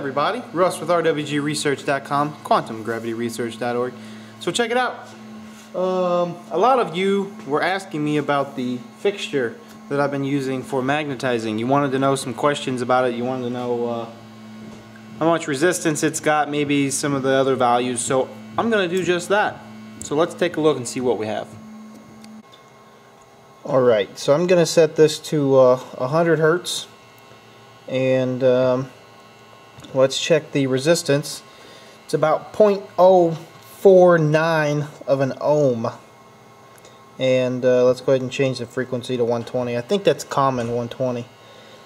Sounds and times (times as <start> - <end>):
Speech: 0.0 - 5.2, 5.8 - 14.2, 15.2 - 21.6, 23.6 - 27.0, 27.9 - 29.0, 29.8 - 31.5, 32.1 - 36.0, 37.2 - 41.3.